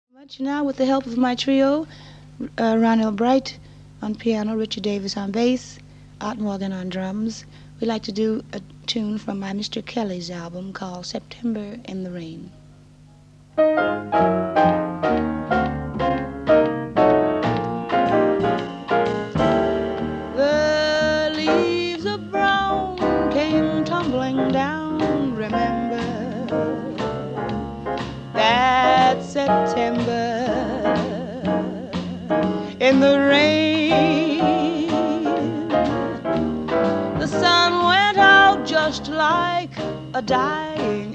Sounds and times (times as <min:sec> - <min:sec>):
Music: 0:12.5 - 0:41.1.